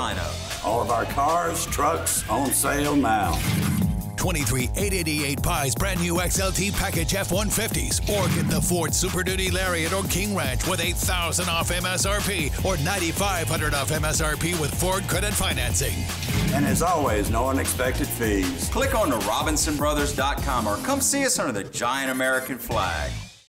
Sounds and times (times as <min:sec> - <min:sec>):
Speech: 0:00.0 - 0:03.4, 0:04.2 - 0:23.2
Music: 0:00.0 - 0:23.4.